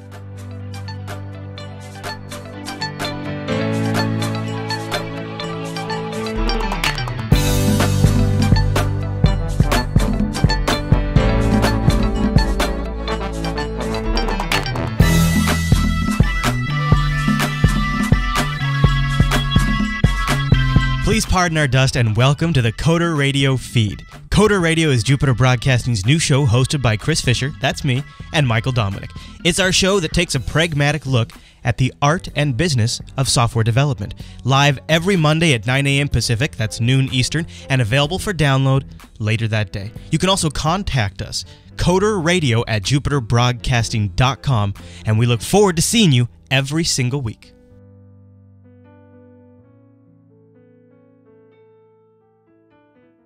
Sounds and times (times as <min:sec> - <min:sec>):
Music: 0:00.0 - 0:53.2
Speech: 0:21.0 - 0:47.5.